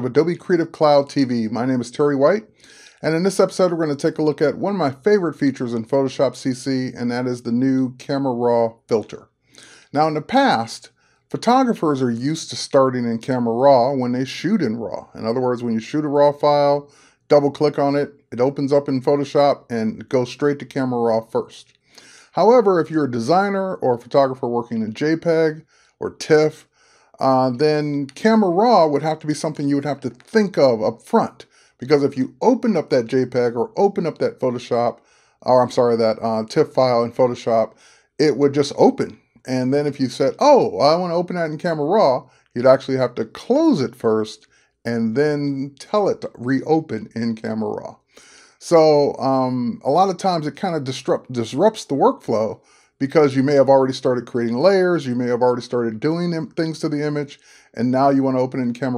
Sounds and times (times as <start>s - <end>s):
Speech: 0.0s - 58.9s.